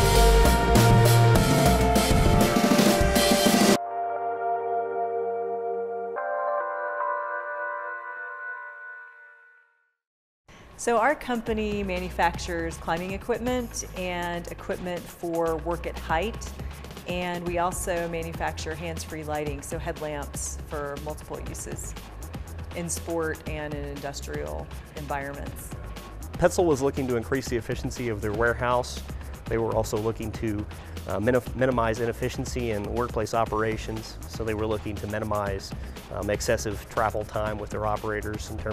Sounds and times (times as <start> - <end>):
Music: 0.0 - 9.3, 10.6 - 38.7
Speech: 10.8 - 16.4, 17.1 - 21.9, 22.8 - 25.6, 26.4 - 38.7.